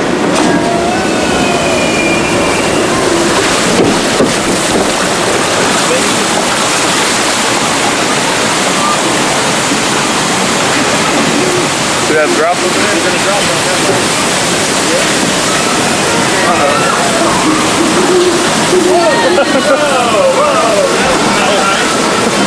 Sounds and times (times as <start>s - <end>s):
Water: 0.0s - 22.4s.